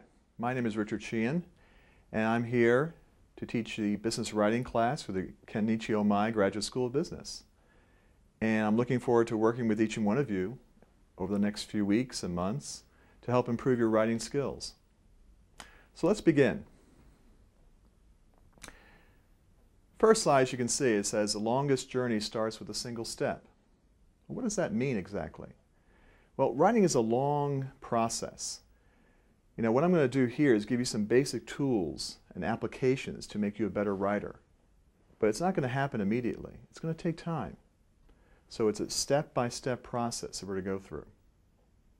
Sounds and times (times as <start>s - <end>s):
Speech: 0.0s - 7.5s, 8.4s - 10.6s, 11.2s - 14.8s, 15.9s - 16.7s, 20.0s - 23.6s, 24.3s - 25.6s, 26.4s - 28.7s, 29.6s - 34.5s, 35.2s - 37.7s, 38.5s - 41.2s.